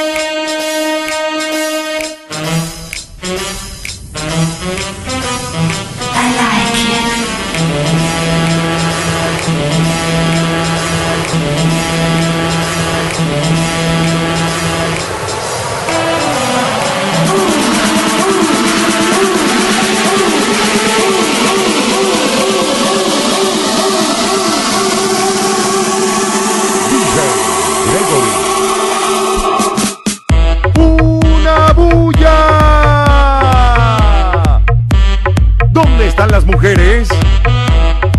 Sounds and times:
Music: 0.0 - 38.1.

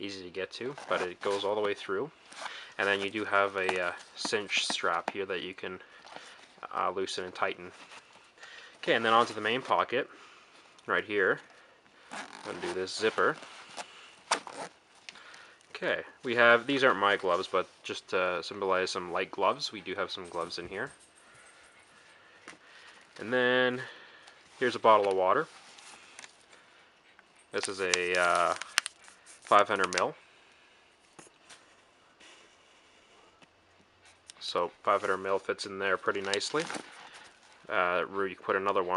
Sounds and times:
Speech: 0.0 - 2.1, 2.8 - 5.8, 6.6 - 7.8, 8.8 - 10.1, 10.8 - 11.4, 12.4 - 13.4, 15.7 - 20.9, 23.2 - 23.9, 24.6 - 25.5, 27.5 - 28.6, 29.5 - 30.2, 34.3 - 36.8, 37.7 - 38.9
Inside, small room: 0.0 - 38.9.

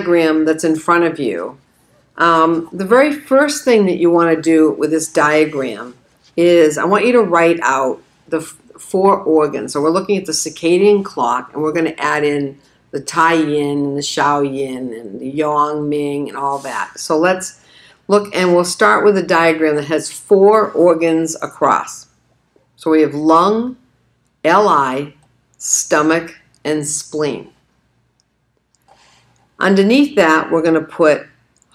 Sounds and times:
Speech: 0.0 - 1.6, 2.2 - 22.1, 22.8 - 23.8, 24.5 - 27.6, 29.6 - 31.4.

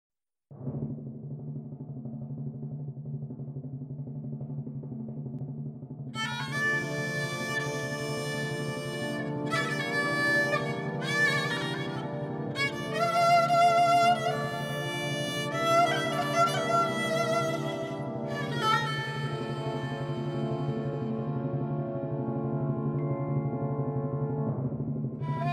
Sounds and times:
Violin, fiddle: 6.2 - 22.0, 25.2 - 25.5.

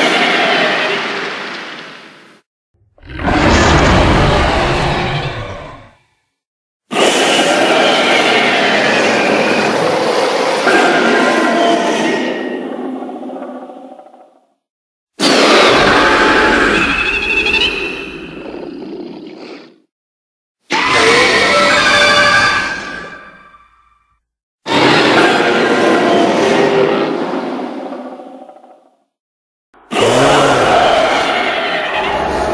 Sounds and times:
Sound effect: 0.0 - 6.4, 15.2 - 19.9, 20.7 - 29.1, 29.8 - 32.5.

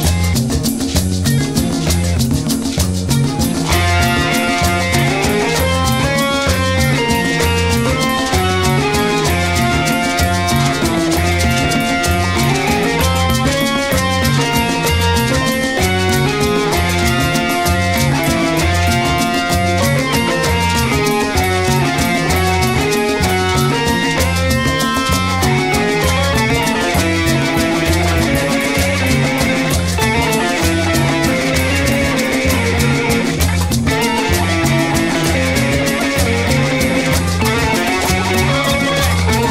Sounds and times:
Music: 0.0 - 39.5.

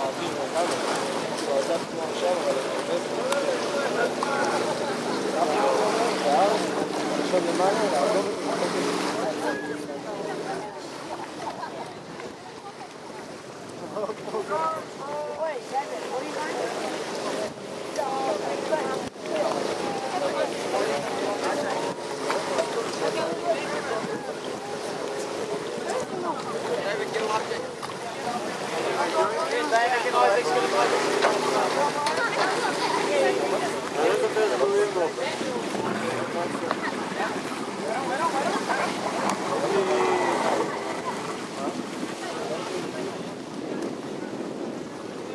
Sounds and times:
Motorboat, speedboat: 0.0 - 45.3
Speech: 13.9 - 44.5.

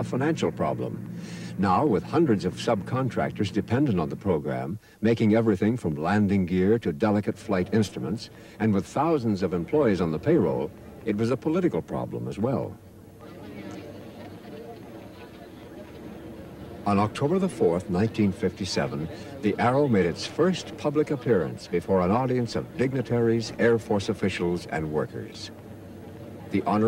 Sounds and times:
Speech: 0.0 - 16.0, 16.8 - 25.5, 26.3 - 26.8.

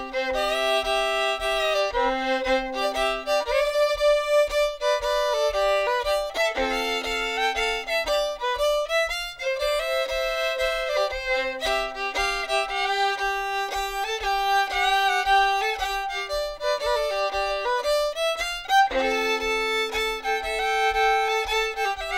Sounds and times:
Violin, fiddle: 0.0 - 22.1.

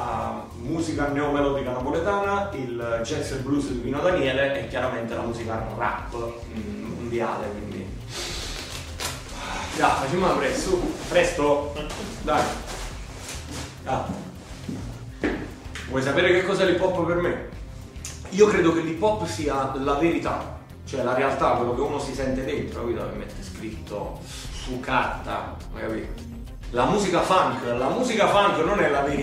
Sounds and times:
Speech: 0.0 - 8.0, 9.7 - 12.6, 13.8 - 14.3, 15.9 - 17.6, 18.2 - 29.2.

